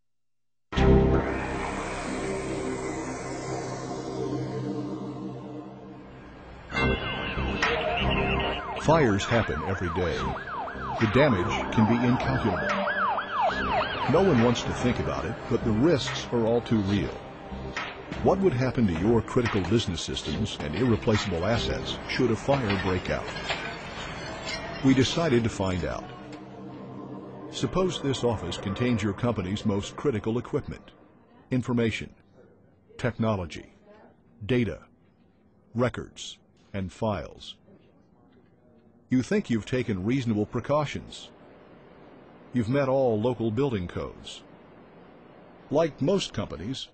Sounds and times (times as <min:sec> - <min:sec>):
Speech: 0:08.8 - 0:10.4, 0:11.0 - 0:12.7, 0:14.1 - 0:17.2, 0:18.2 - 0:23.4, 0:24.8 - 0:26.2, 0:27.6 - 0:34.9, 0:35.7 - 0:41.3, 0:42.6 - 0:44.5, 0:45.7 - 0:46.9.